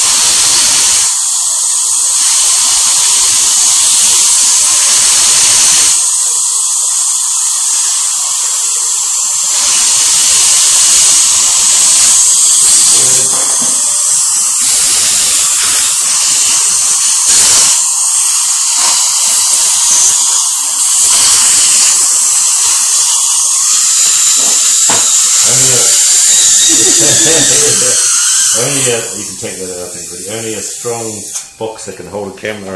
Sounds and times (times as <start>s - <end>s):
Dental drill, dentist's drill: 0.0s - 32.7s
Speech: 25.4s - 26.0s, 28.6s - 32.7s.